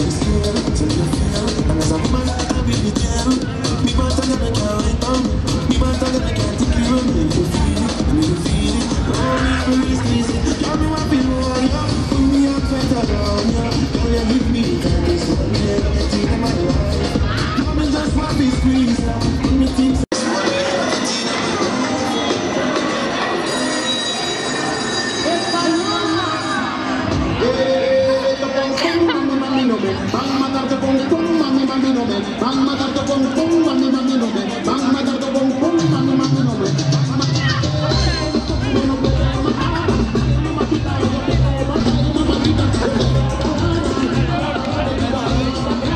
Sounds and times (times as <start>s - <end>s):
Speech: 0.0s - 23.4s, 25.2s - 45.9s
Music: 0.0s - 45.9s.